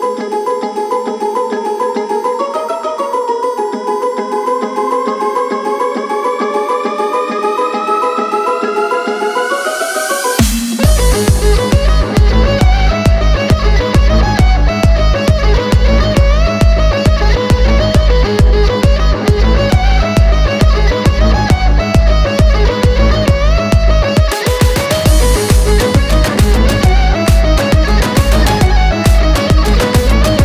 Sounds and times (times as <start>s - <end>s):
Violin, fiddle: 0.0s - 30.4s.